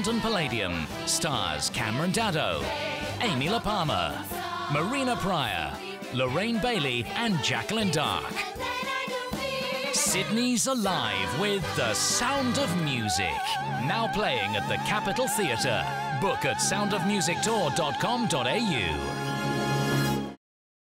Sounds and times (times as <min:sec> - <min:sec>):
Speech: 0:00.0 - 0:08.4, 0:10.0 - 0:19.0
Exciting music: 0:00.0 - 0:20.4.